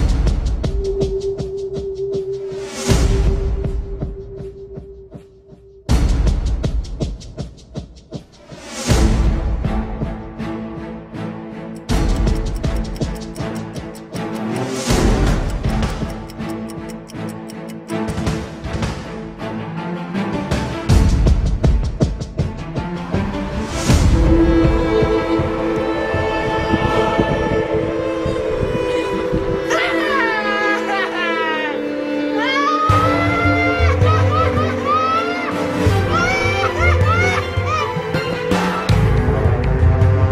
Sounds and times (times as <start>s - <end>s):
Music: 0.0s - 40.3s.